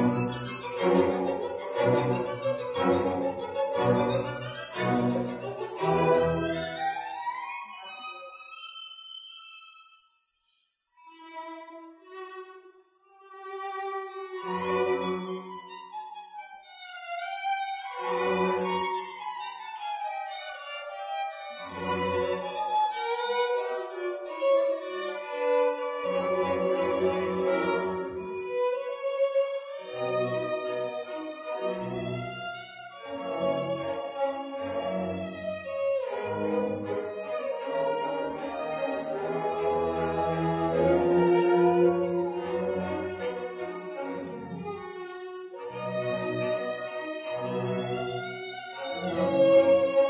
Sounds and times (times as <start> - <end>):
Violin, fiddle: 0.0 - 10.0, 11.0 - 50.0.